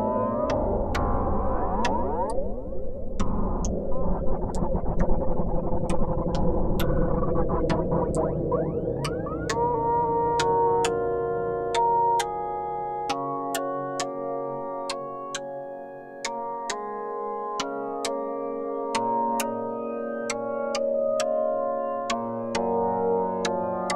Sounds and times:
Music: 0.0 - 23.9.

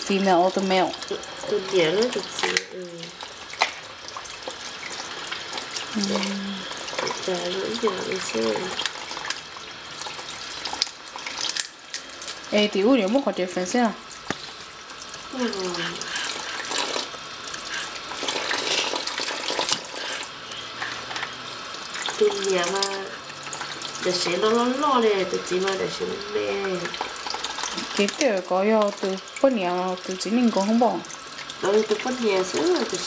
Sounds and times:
Sink (filling or washing): 0.0 - 33.0
Water: 0.0 - 33.0
Water tap, faucet: 0.0 - 33.0.

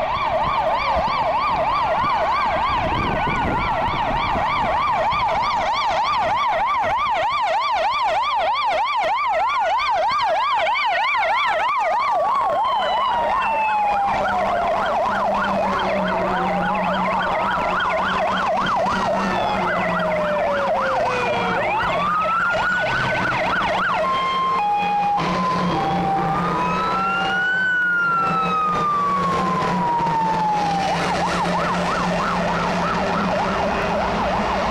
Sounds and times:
Fire engine, fire truck (siren): 0.0 - 34.7
Truck: 12.2 - 34.7.

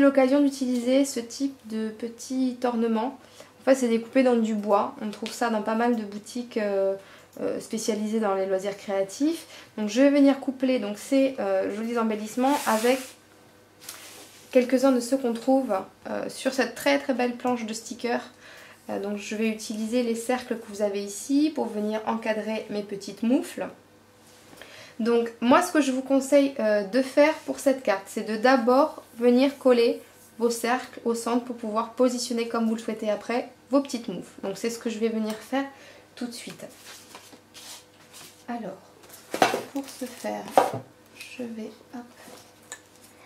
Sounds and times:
Speech: 0.0 - 13.2, 14.5 - 23.8, 25.0 - 36.8, 38.5 - 38.9, 39.6 - 42.2.

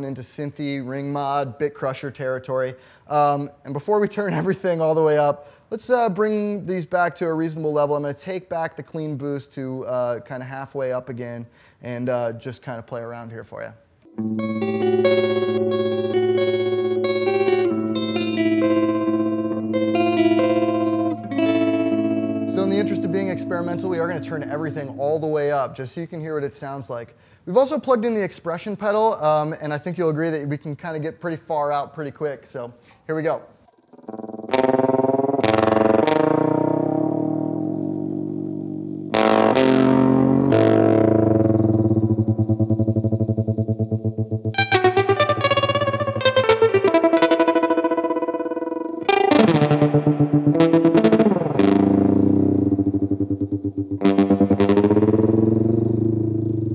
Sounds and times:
Distortion: 0.0 - 56.7
Electric guitar: 14.0 - 25.5, 33.7 - 56.7
Effects unit: 14.0 - 25.7, 33.7 - 56.7.

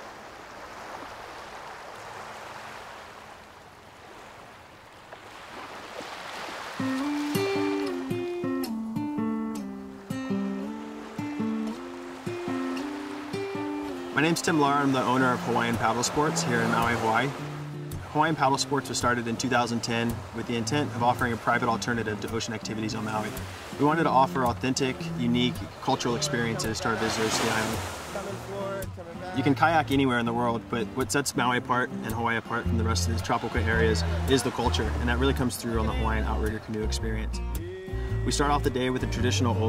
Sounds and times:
Rowboat, canoe, kayak: 0.0 - 8.6, 9.8 - 39.6
Music: 6.8 - 39.6
Speech: 14.2 - 17.4, 18.1 - 37.4, 38.2 - 39.6.

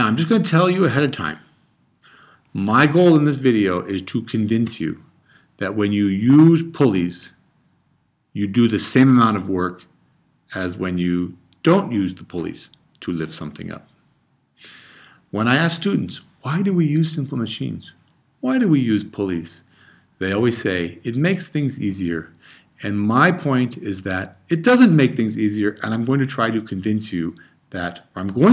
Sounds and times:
Speech: 0.0 - 1.5, 2.6 - 7.4, 8.4 - 9.9, 10.5 - 14.0, 15.3 - 28.5.

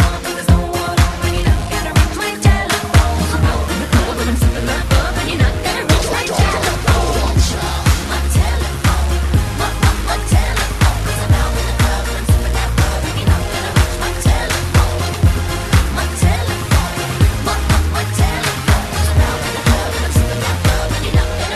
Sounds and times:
Music: 0.0 - 21.5.

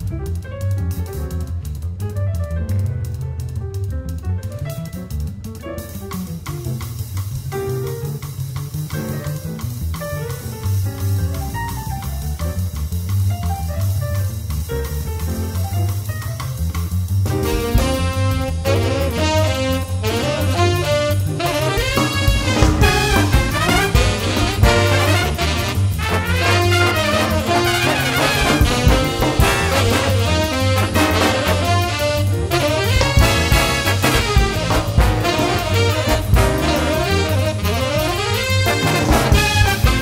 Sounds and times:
Jazz: 0.0 - 40.0.

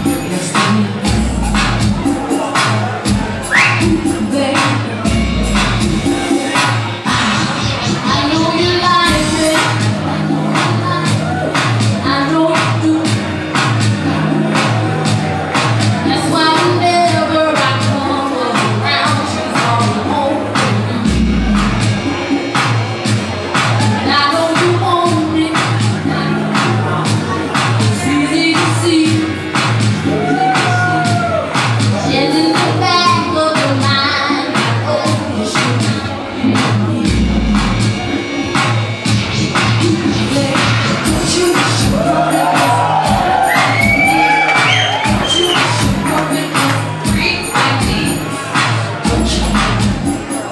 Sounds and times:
Music: 0.0 - 50.5.

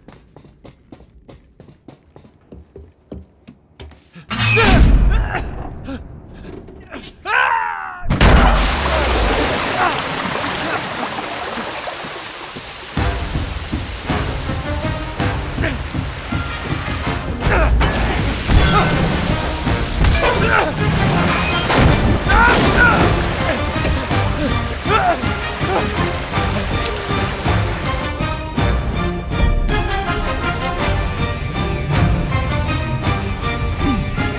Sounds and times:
Music: 13.0 - 34.3.

